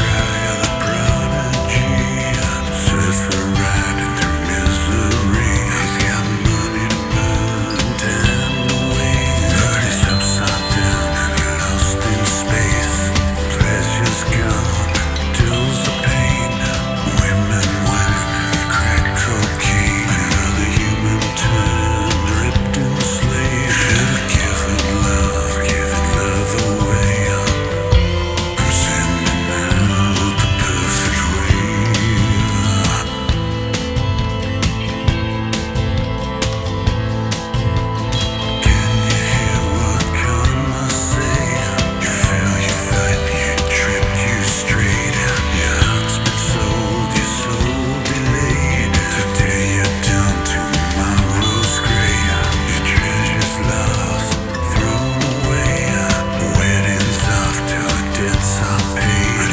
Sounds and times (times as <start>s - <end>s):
Tender music: 0.0s - 59.5s.